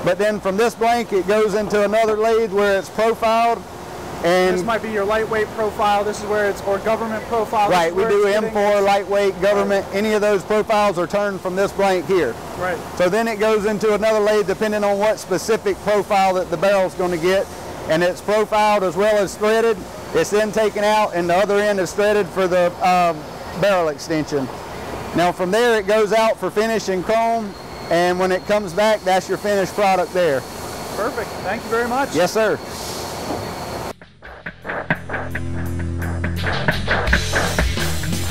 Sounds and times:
Speech: 0.0 - 3.6, 4.2 - 24.5, 25.2 - 30.4, 31.0 - 32.6
Music: 34.0 - 38.3.

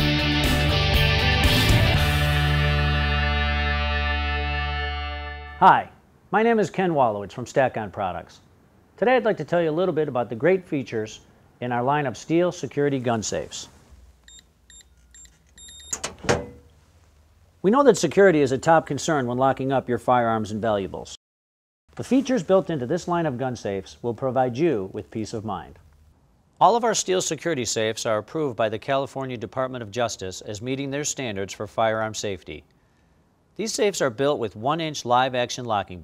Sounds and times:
Speech: 5.6 - 13.7, 17.6 - 21.2, 22.0 - 25.8, 26.6 - 32.7, 33.6 - 36.0.

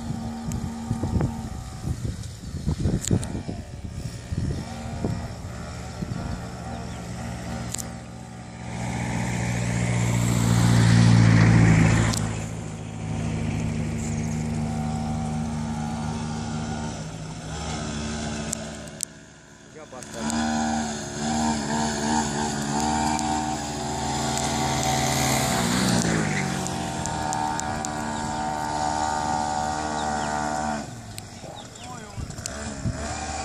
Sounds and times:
Motorboat, speedboat: 0.0 - 33.4
Speech: 19.8 - 20.4, 31.8 - 32.3.

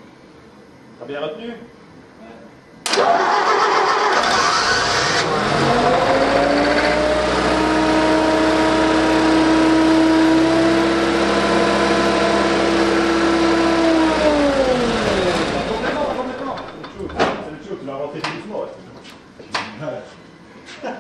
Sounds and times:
Speech: 1.0 - 2.6, 15.6 - 19.0, 19.6 - 20.2
Medium engine (mid frequency): 2.9 - 16.9
Car: 4.2 - 15.6.

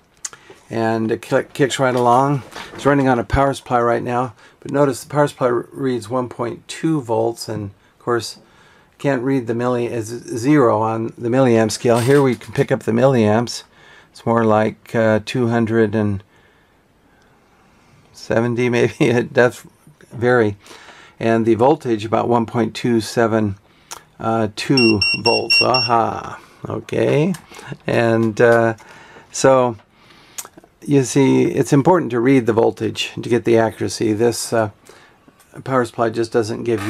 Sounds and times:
Speech: 0.7 - 8.4, 9.0 - 16.3, 18.2 - 20.6, 21.2 - 23.6, 24.2 - 29.8, 30.8 - 34.8, 35.5 - 36.8.

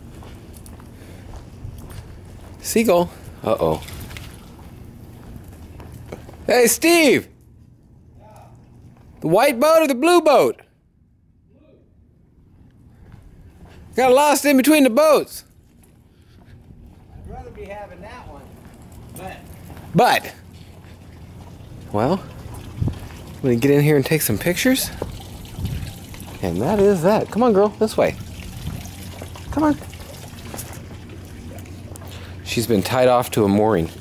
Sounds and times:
Speech: 8.2 - 8.6, 14.0 - 15.5, 17.2 - 18.6, 23.4 - 25.0, 26.4 - 28.2, 29.5 - 29.8, 32.5 - 34.0.

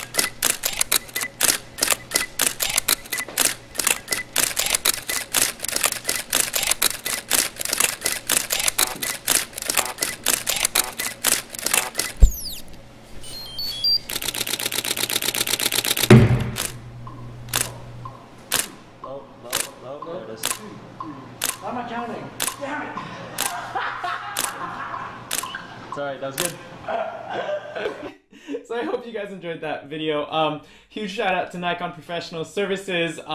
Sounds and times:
Single-lens reflex camera: 0.0 - 12.7, 14.1 - 16.8, 17.5 - 17.7, 18.5 - 18.8, 19.5 - 19.8, 20.4 - 20.6, 21.4 - 21.6, 22.4 - 22.6, 24.4 - 24.6, 25.3 - 25.6.

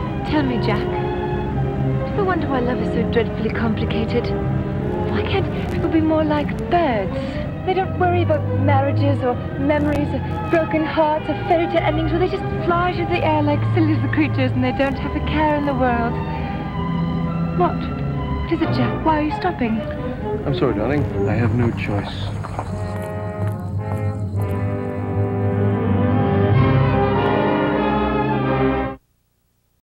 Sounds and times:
Music: 0.0 - 29.0
Television: 1.8 - 29.8
Speech: 20.5 - 22.3.

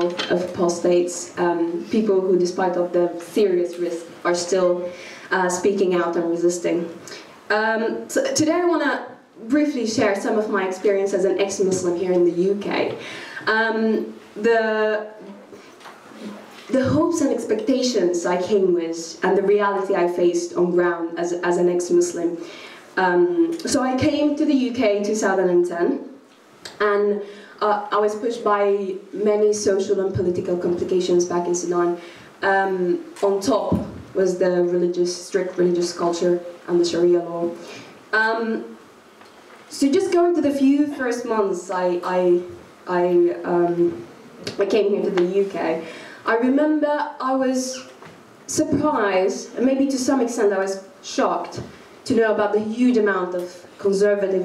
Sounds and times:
Female speech, woman speaking: 0.0 - 15.2, 16.7 - 22.4, 23.0 - 26.1, 26.7 - 37.6, 38.2 - 38.8, 39.7 - 54.4
Narration, monologue: 0.0 - 54.4.

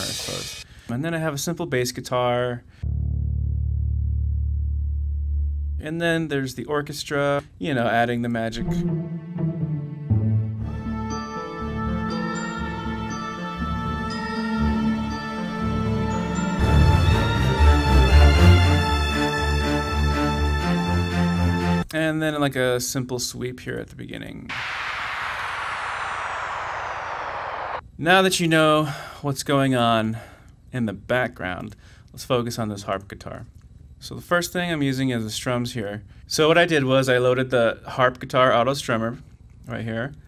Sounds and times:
Speech: 0.0 - 2.7, 5.8 - 8.9, 21.9 - 24.5, 28.0 - 40.2
Synthesizer: 8.6 - 21.9.

